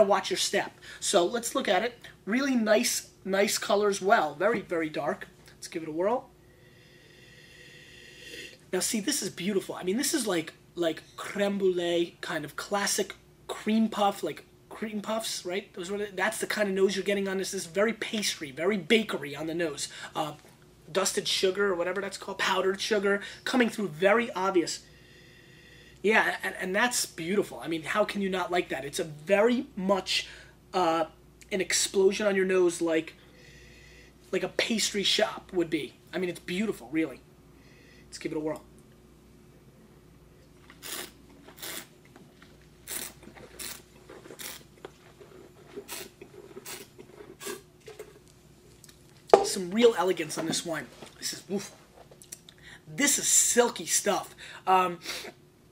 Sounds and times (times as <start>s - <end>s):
Speech: 0.0s - 6.3s, 8.7s - 24.8s, 26.0s - 33.2s, 34.3s - 37.2s, 38.1s - 38.7s, 49.4s - 51.8s, 52.9s - 55.1s
Inside, small room: 0.0s - 55.7s.